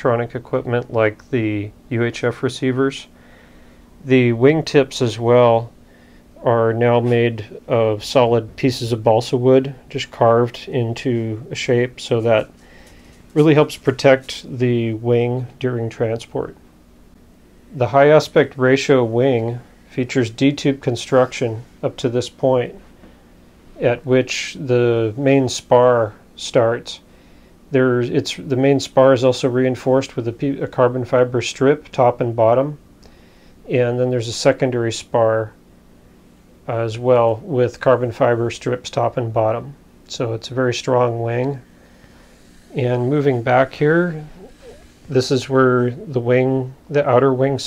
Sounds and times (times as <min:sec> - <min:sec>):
Speech: 0:00.0 - 0:03.1, 0:04.0 - 0:05.8, 0:06.4 - 0:12.5, 0:13.4 - 0:16.6, 0:17.8 - 0:22.8, 0:23.8 - 0:27.1, 0:27.7 - 0:32.8, 0:33.7 - 0:35.6, 0:36.6 - 0:41.7, 0:42.7 - 0:47.6.